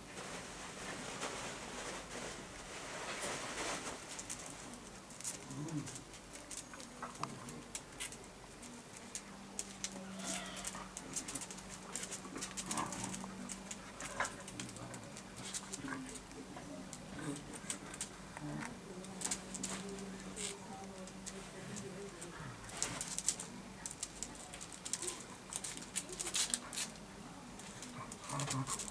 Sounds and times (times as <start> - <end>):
Animal: 9.8 - 16.2.